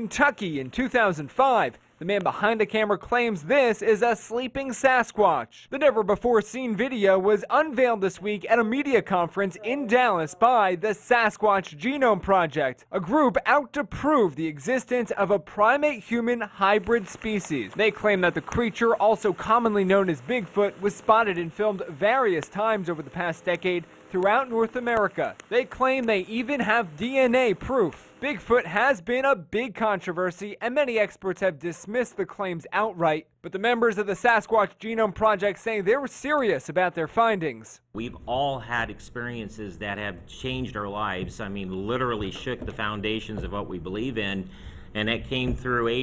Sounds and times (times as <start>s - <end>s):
Speech: 0.0s - 46.0s.